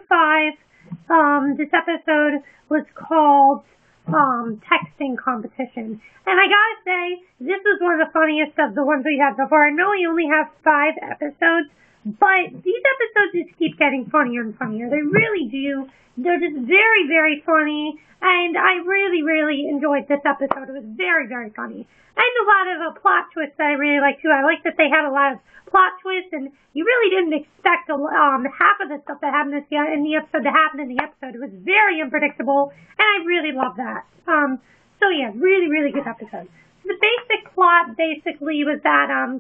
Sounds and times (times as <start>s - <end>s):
Speech: 0.0s - 39.4s.